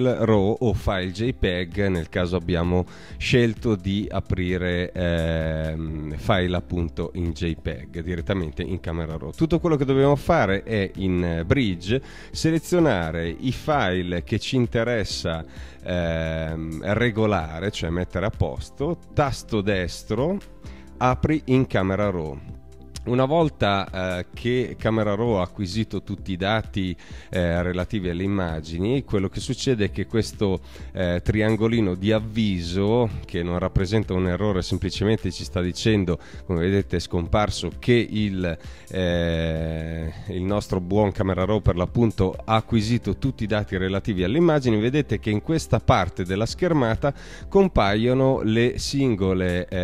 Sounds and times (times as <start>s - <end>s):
Music: 0.0s - 49.8s
Speech: 0.0s - 49.8s.